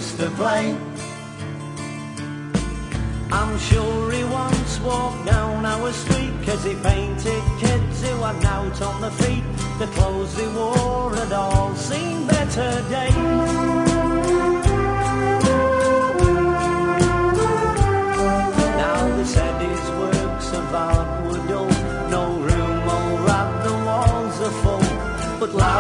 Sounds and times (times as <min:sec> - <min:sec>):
Guitar: 0:00.0 - 0:25.8.